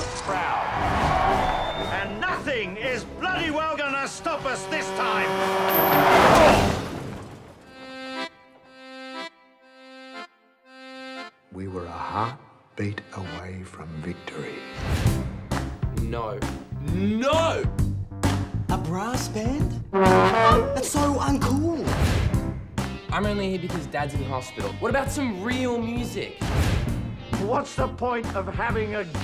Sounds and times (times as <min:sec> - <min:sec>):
Music: 0:00.0 - 0:05.3, 0:07.7 - 0:29.2.